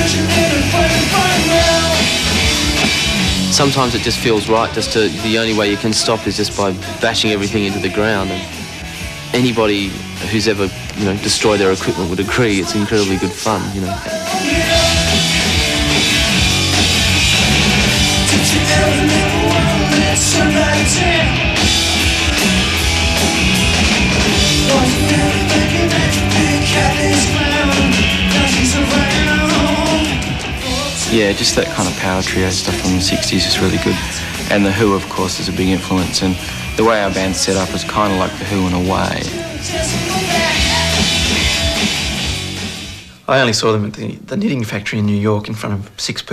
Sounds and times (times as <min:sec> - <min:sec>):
Singing: 0:00.0 - 0:02.3, 0:04.5 - 0:08.6, 0:11.3 - 0:15.4, 0:18.2 - 0:21.4, 0:24.5 - 0:35.0, 0:36.8 - 0:41.7
Rock and roll: 0:00.0 - 0:43.3.